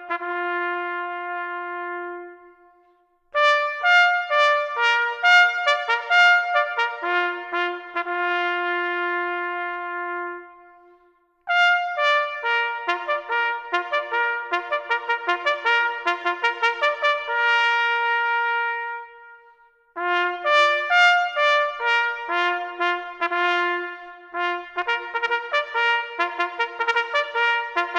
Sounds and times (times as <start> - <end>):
Music: 0.0 - 27.9.